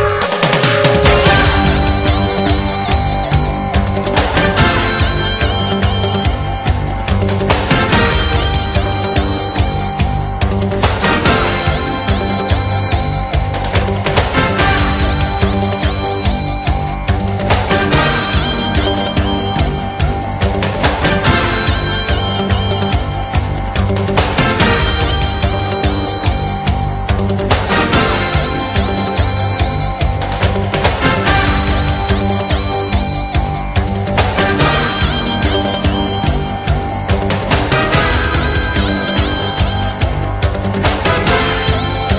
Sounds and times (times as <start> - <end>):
Music: 0.0 - 42.1.